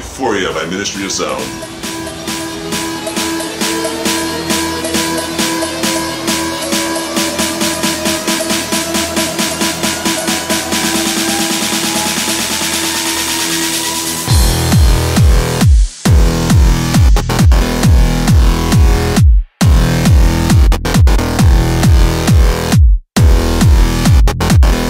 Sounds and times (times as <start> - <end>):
Music: 0.2 - 24.9.